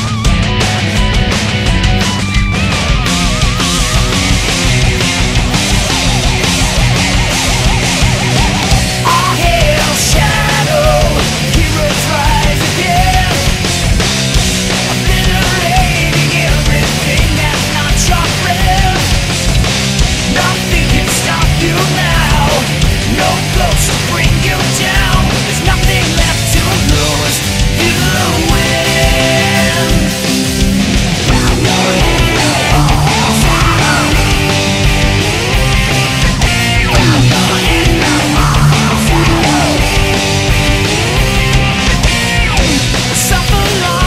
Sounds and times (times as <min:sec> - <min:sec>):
Music: 0:00.0 - 0:44.0.